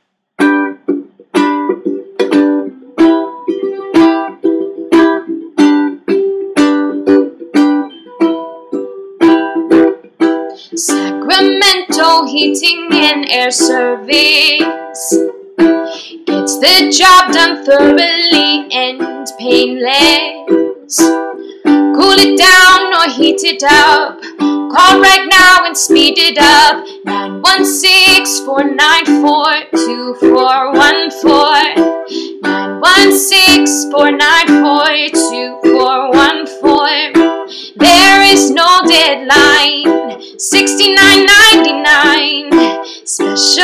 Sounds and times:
Music: 0.0s - 43.6s.

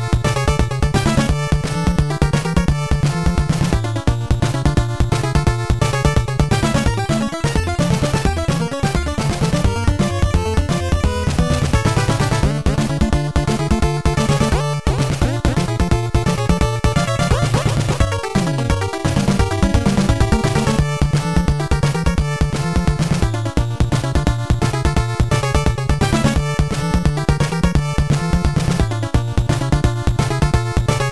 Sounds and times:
Video game music: 0.0s - 31.1s.

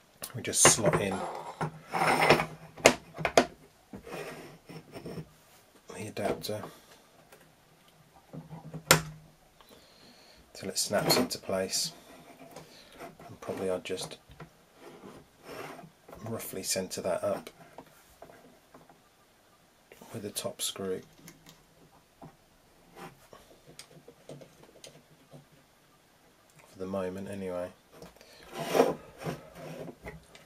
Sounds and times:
Speech: 0.3s - 1.5s, 5.9s - 6.7s, 10.6s - 12.0s, 13.3s - 14.2s, 16.2s - 17.5s, 20.0s - 21.1s, 26.7s - 27.8s.

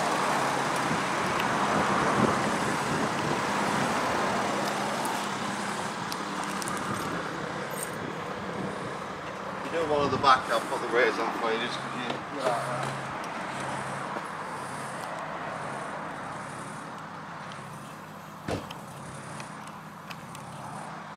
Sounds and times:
Car passing by: 9.6s - 16.8s
Speech: 9.7s - 13.0s.

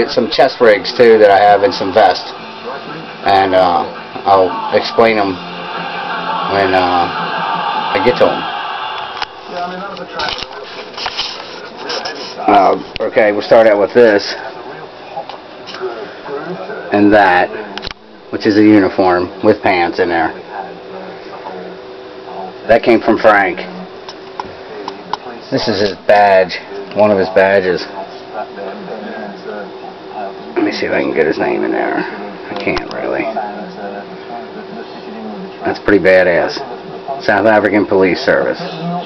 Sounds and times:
Speech: 0.0s - 5.4s, 6.5s - 7.2s, 7.9s - 8.5s, 9.5s - 39.0s.

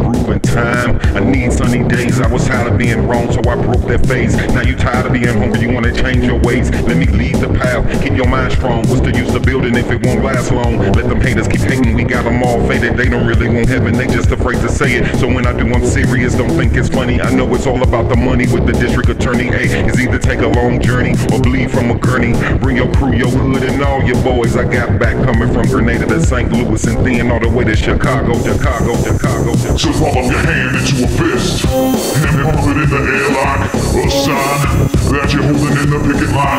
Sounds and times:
Music: 0.0s - 36.5s.

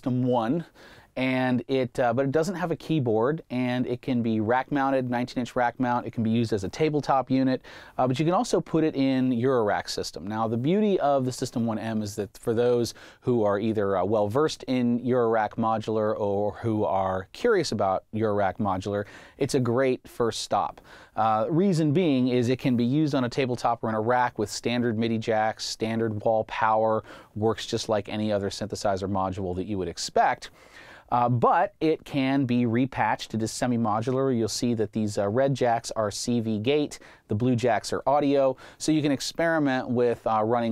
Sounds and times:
Speech: 0.0s - 30.5s, 31.1s - 40.7s.

